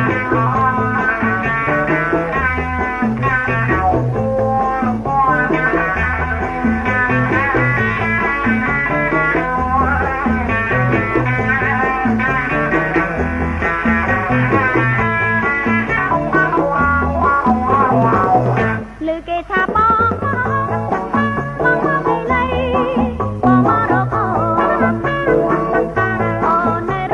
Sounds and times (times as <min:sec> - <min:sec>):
Music: 0:00.0 - 0:27.1.